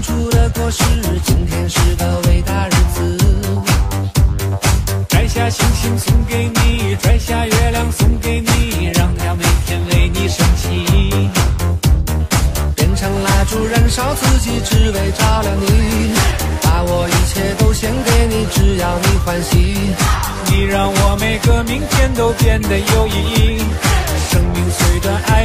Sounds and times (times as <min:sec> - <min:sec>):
Music: 0:00.0 - 0:25.4.